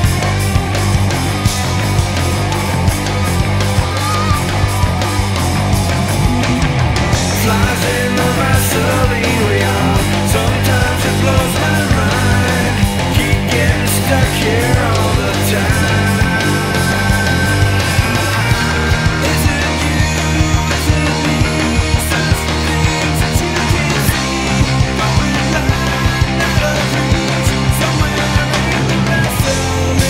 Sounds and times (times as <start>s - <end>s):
Drum: 0.0s - 30.1s
Drum kit: 0.0s - 30.1s
Guitar: 0.0s - 30.1s
Rock music: 0.0s - 30.1s.